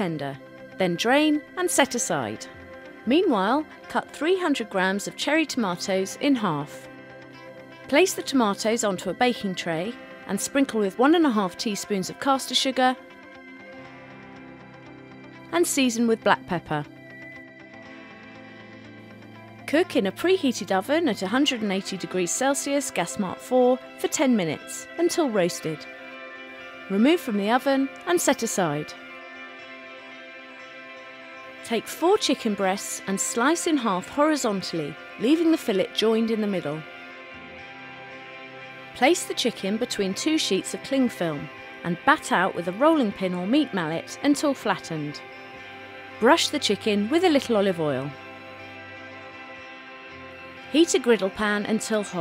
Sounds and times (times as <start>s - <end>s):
Speech: 0.0s - 2.5s, 3.1s - 6.8s, 7.9s - 13.0s, 15.6s - 16.8s, 19.7s - 25.8s, 26.9s - 28.9s, 31.7s - 36.8s, 39.0s - 45.2s, 46.2s - 48.1s, 50.7s - 52.2s
Music: 0.0s - 52.2s.